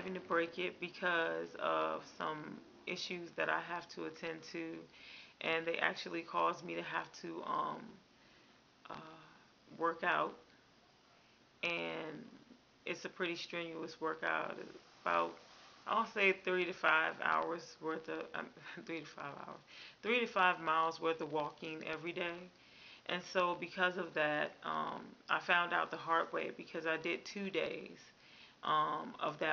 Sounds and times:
Speech: 0.0s - 8.0s, 8.9s - 10.4s, 11.6s - 12.3s, 12.9s - 22.5s, 23.1s - 29.5s.

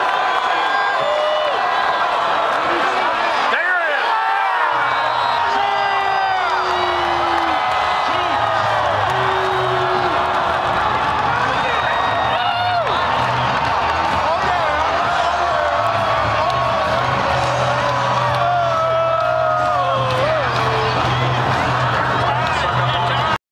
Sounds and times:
Music: 4.7s - 23.4s.

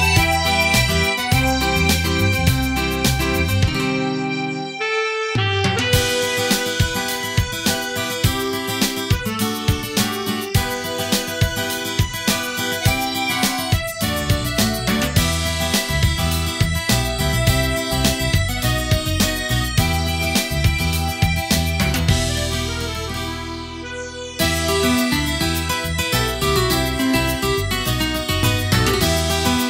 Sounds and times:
Harmonica: 0.0s - 29.7s.

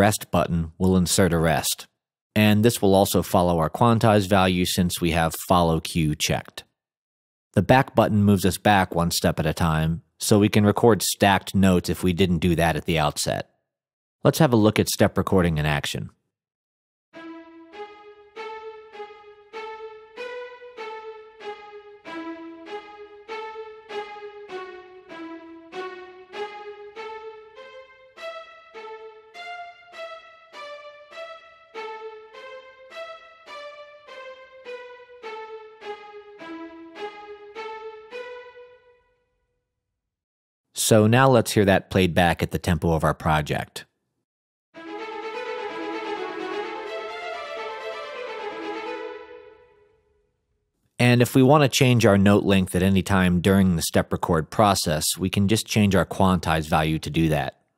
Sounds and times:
Speech: 0.0s - 6.6s, 7.6s - 13.5s, 14.2s - 16.2s, 40.8s - 43.9s, 51.0s - 57.6s.

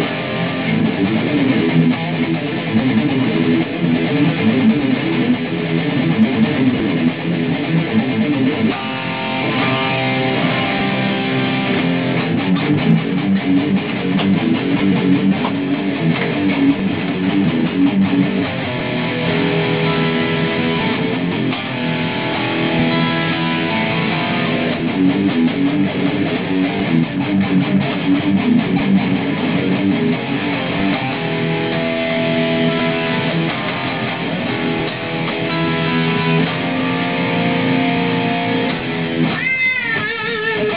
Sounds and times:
Electric guitar: 0.0s - 40.7s
Strum: 0.0s - 40.7s.

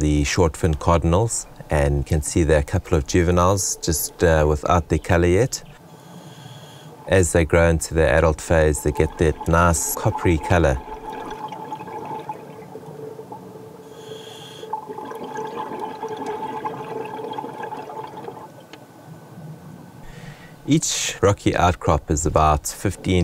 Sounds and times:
Speech: 0.0s - 5.7s, 7.1s - 10.8s, 20.7s - 23.2s.

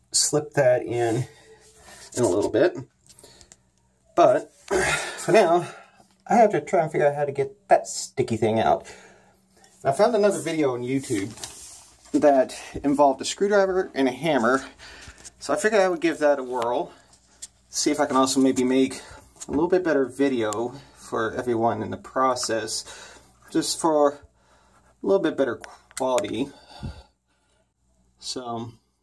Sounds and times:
Speech: 0.1s - 1.4s, 2.1s - 2.9s, 4.2s - 4.5s, 5.3s - 8.9s, 9.8s - 11.4s, 12.1s - 14.8s, 15.4s - 17.0s, 17.7s - 22.9s, 23.5s - 24.3s, 25.0s - 26.6s, 28.2s - 28.8s.

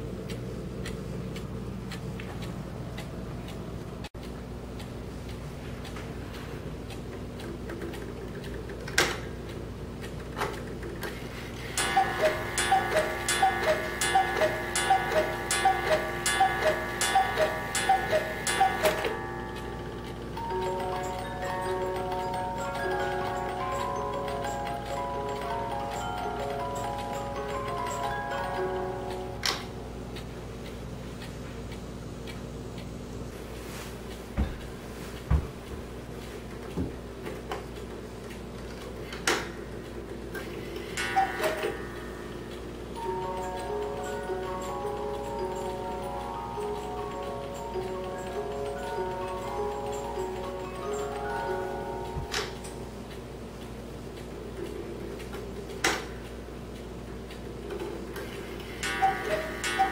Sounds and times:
Clock: 0.0s - 59.9s
Music: 19.3s - 29.8s, 43.0s - 52.8s.

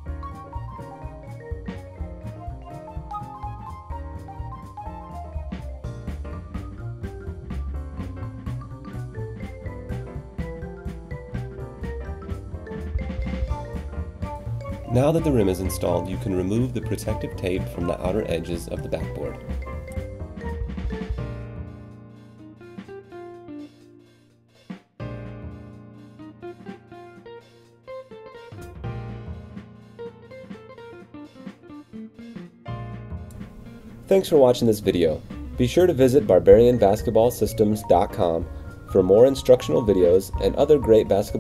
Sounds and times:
Music: 0.0s - 41.4s
Speech: 14.9s - 19.4s, 34.1s - 41.4s.

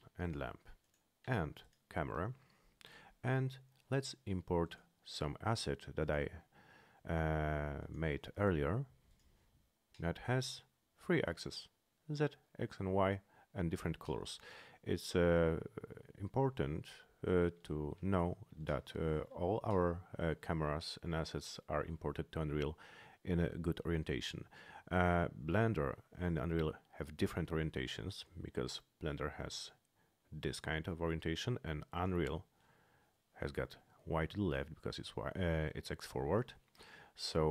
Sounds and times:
Speech: 0.0s - 2.4s, 3.2s - 9.0s, 10.0s - 32.5s, 33.4s - 36.6s, 37.2s - 37.5s.

